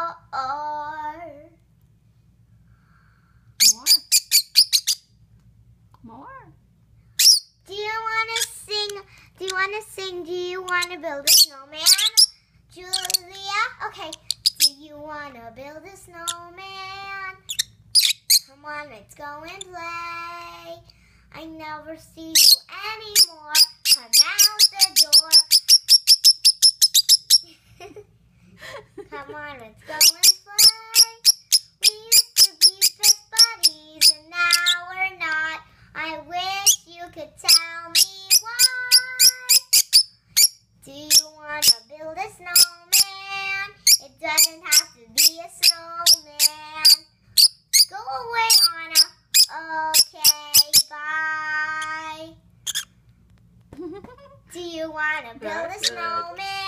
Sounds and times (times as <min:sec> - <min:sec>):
Child singing: 0:00.0 - 0:01.6, 0:07.7 - 0:17.5, 0:18.5 - 0:20.8, 0:21.4 - 0:25.6, 0:29.1 - 0:39.9, 0:40.8 - 0:47.0, 0:47.9 - 0:52.4, 0:54.5 - 0:56.6.